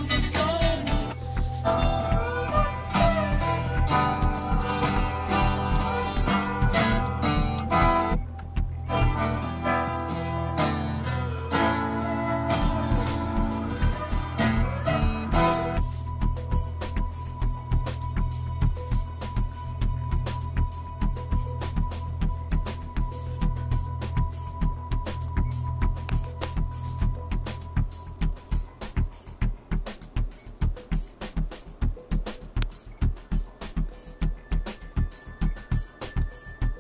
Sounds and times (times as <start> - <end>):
Bluegrass: 0.0 - 36.8.